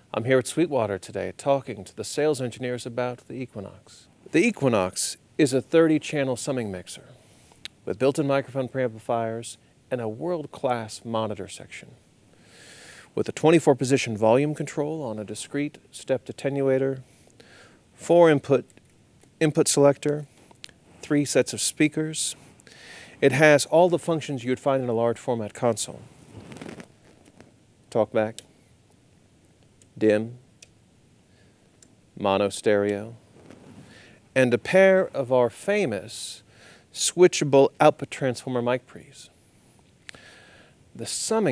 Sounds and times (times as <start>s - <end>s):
Speech: 0.1s - 7.2s, 7.8s - 12.0s, 13.2s - 17.1s, 18.0s - 18.7s, 19.4s - 20.3s, 21.0s - 22.4s, 23.2s - 26.1s, 27.9s - 28.5s, 30.0s - 30.4s, 32.2s - 33.2s, 34.4s - 39.4s, 41.0s - 41.5s.